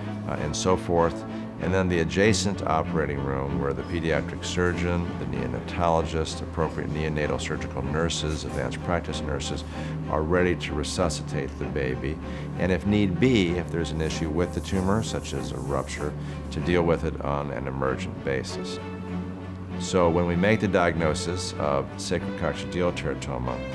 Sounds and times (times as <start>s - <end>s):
Music: 0.0s - 23.7s
Speech: 0.3s - 18.8s, 19.8s - 23.7s.